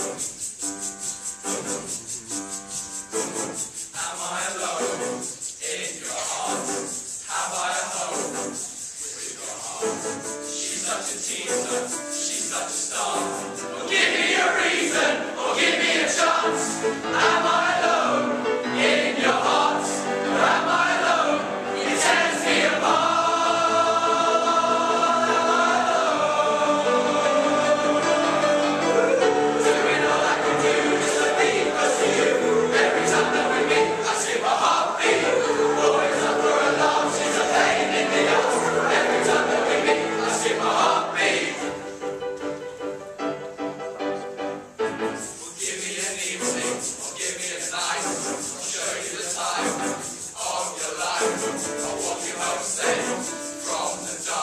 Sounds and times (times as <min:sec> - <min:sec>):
Choir: 0:03.2 - 0:42.0, 0:45.1 - 0:54.4.